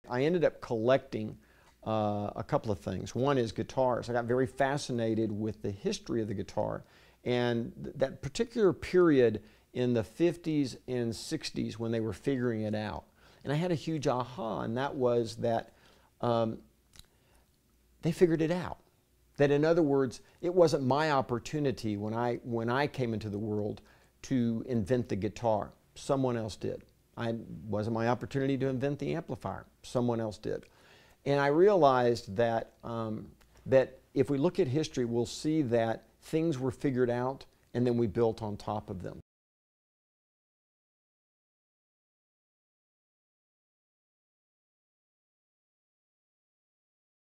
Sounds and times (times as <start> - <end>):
Speech: 0.0 - 16.7, 18.0 - 39.2.